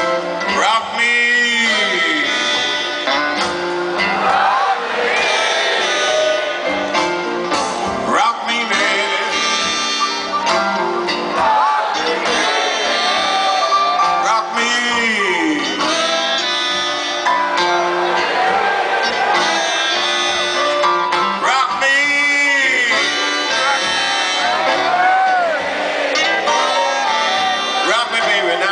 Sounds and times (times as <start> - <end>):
Music: 0.0 - 28.7.